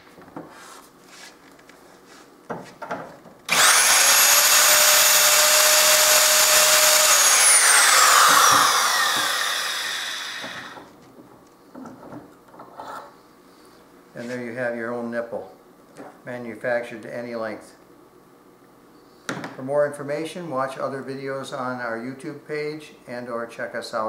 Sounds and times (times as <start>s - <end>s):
Speech: 14.2s - 15.6s, 16.2s - 17.8s, 19.6s - 24.0s.